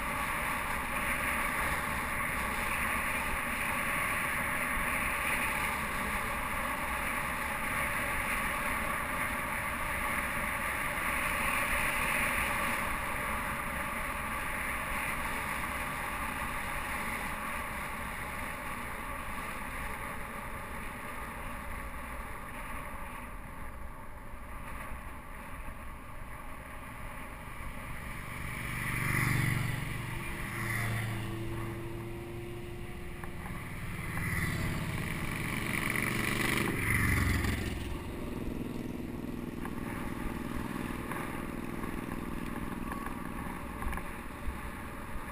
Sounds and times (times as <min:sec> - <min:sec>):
Vehicle: 0:00.0 - 0:45.3.